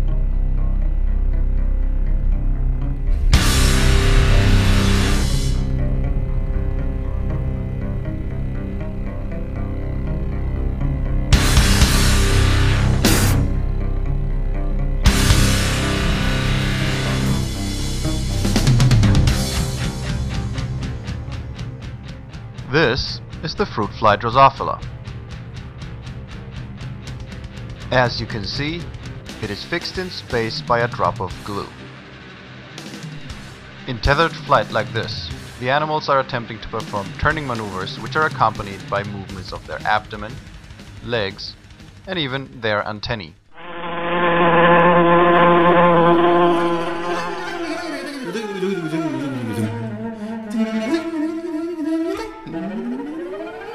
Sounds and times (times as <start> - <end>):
Music: 0.0 - 53.7
Speech: 22.6 - 24.9, 27.9 - 31.8, 33.9 - 40.4, 41.0 - 43.4, 47.6 - 49.8.